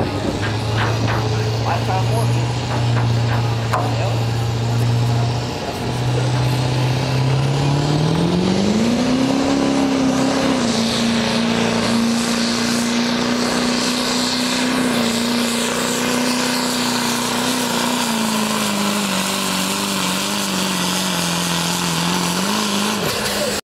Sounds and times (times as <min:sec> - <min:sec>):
Truck: 0:00.0 - 0:23.6.